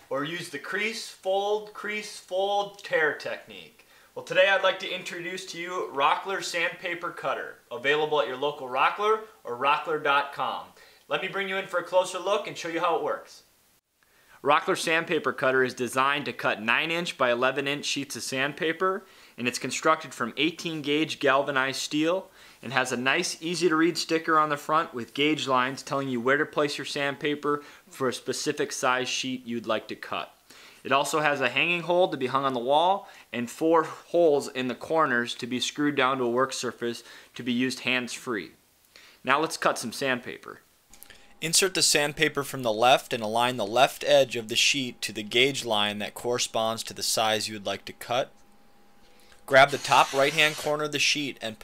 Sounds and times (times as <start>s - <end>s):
Speech: 0.1s - 13.5s, 14.4s - 38.6s, 39.2s - 40.7s, 41.4s - 48.3s, 49.5s - 51.6s.